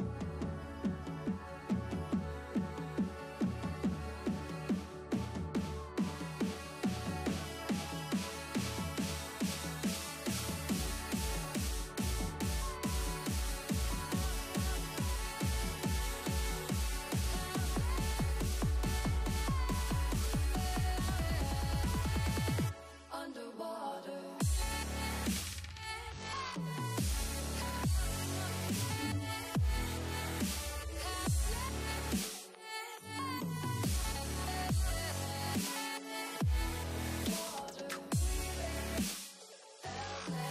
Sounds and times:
Music: 0.0 - 40.5.

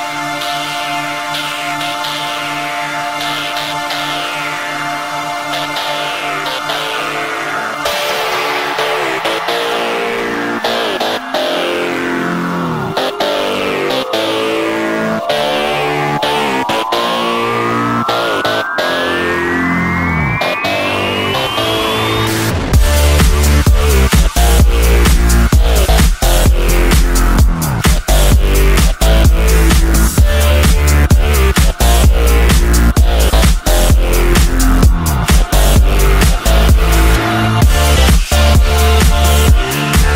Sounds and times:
Dubstep: 0.1 - 40.1.

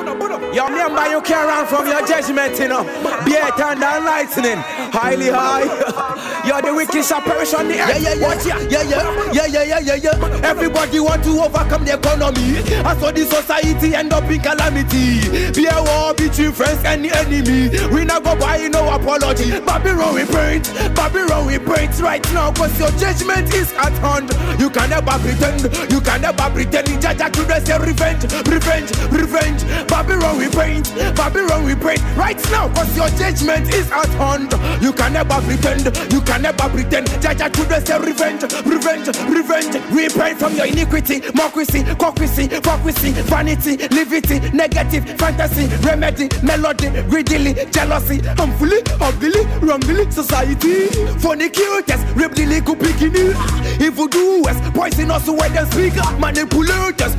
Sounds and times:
Music: 0.0 - 57.1.

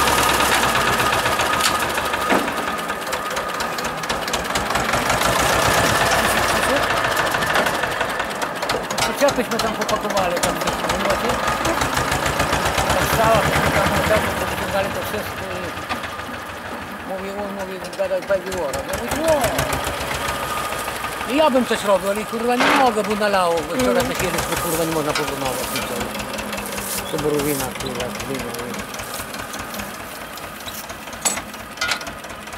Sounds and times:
Vehicle: 0.0 - 32.5
Speech: 9.0 - 11.8, 12.9 - 15.8, 17.0 - 19.8, 21.3 - 26.2, 26.9 - 28.8.

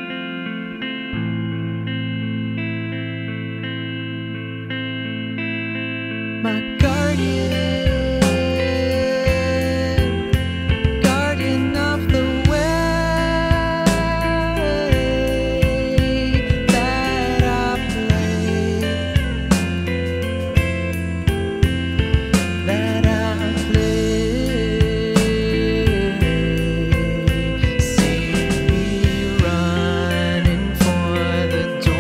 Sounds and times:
Music: 0.0 - 32.0.

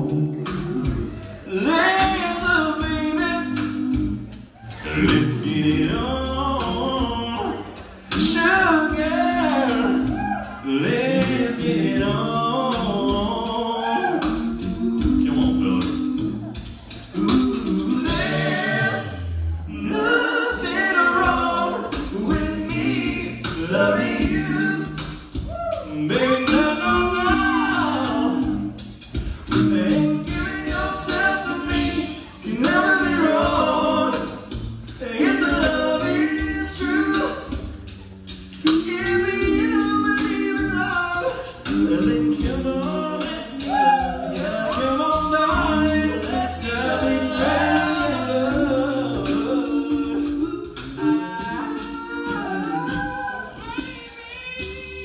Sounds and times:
Choir: 0.0 - 38.0, 38.6 - 55.0
Male singing: 1.5 - 3.8, 4.9 - 14.4, 25.8 - 28.5, 38.6 - 55.0.

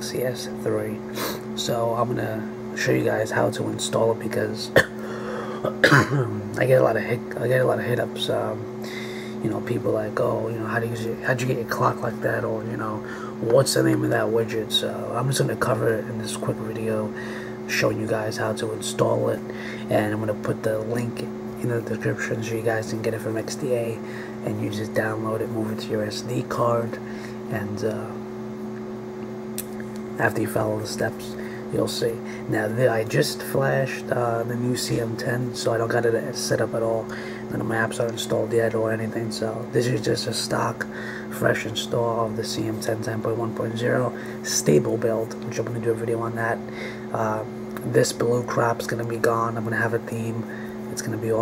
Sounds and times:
Speech: 0.0 - 4.9, 5.7 - 8.7, 9.4 - 28.3, 29.6 - 51.4.

